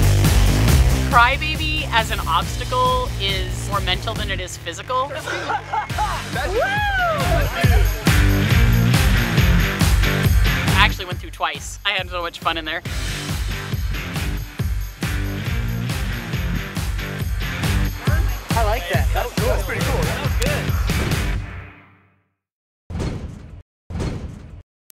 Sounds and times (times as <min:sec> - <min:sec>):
Music: 0:00.0 - 0:22.4
Speech: 0:01.1 - 0:05.5, 0:10.8 - 0:12.8, 0:18.0 - 0:20.7.